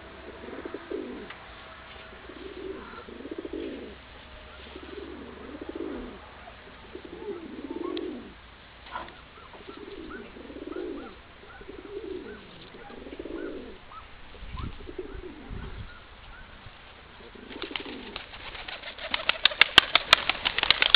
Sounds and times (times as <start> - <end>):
Outside, rural or natural: 0.0 - 20.9
Pigeon, dove: 0.3 - 16.6, 17.2 - 20.9.